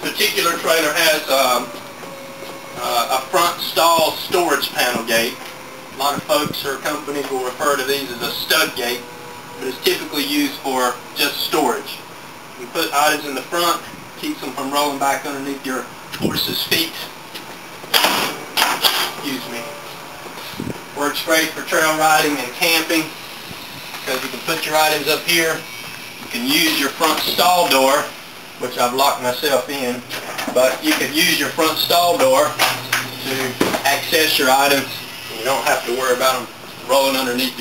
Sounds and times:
Speech: 0:00.0 - 0:01.8, 0:02.8 - 0:05.4, 0:06.0 - 0:12.0, 0:12.6 - 0:17.2, 0:19.2 - 0:19.7, 0:21.0 - 0:23.2, 0:24.0 - 0:25.6, 0:26.3 - 0:32.6, 0:33.2 - 0:37.6.

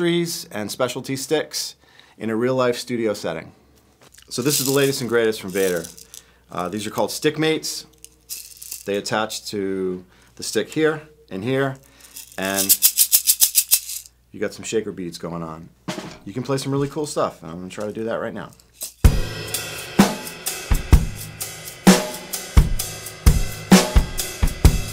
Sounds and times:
Speech: 0:00.0 - 0:03.6, 0:04.3 - 0:07.9, 0:08.8 - 0:11.8, 0:12.4 - 0:12.8, 0:14.3 - 0:18.6
Music: 0:15.9 - 0:16.2, 0:19.0 - 0:24.9.

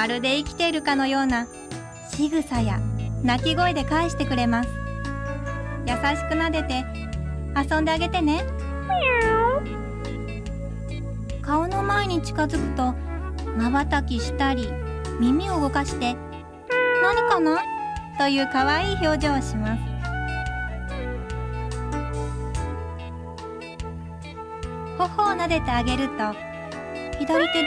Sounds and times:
Speech: 0:00.0 - 0:01.5, 0:02.2 - 0:04.7, 0:05.9 - 0:06.9, 0:07.6 - 0:08.5, 0:11.5 - 0:13.0, 0:13.6 - 0:16.2, 0:17.0 - 0:19.9, 0:25.0 - 0:26.4, 0:27.2 - 0:27.6
Music: 0:00.0 - 0:27.6
Meow: 0:08.8 - 0:09.8, 0:16.7 - 0:17.8, 0:27.2 - 0:27.6.

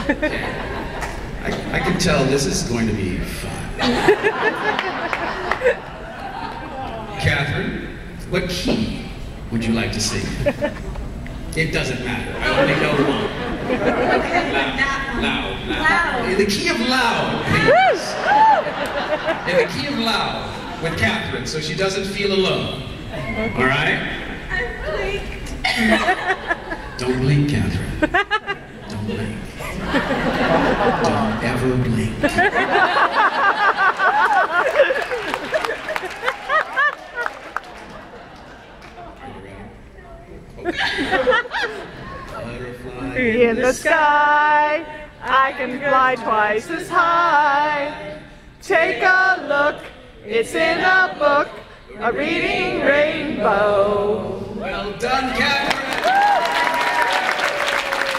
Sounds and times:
Laughter: 0:00.0 - 0:01.2, 0:03.8 - 0:06.9, 0:10.3 - 0:11.0, 0:12.5 - 0:14.8, 0:18.2 - 0:20.0, 0:25.6 - 0:27.0, 0:28.0 - 0:31.5, 0:32.2 - 0:39.0, 0:40.6 - 0:42.3.

